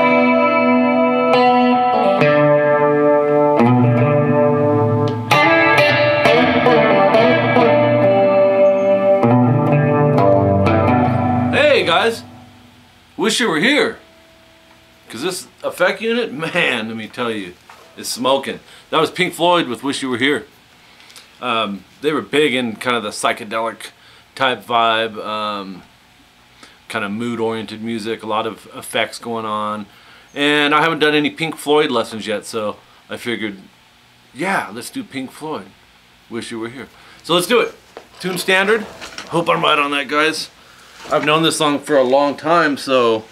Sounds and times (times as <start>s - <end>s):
Acoustic guitar: 0.0s - 12.9s, 38.1s - 42.4s.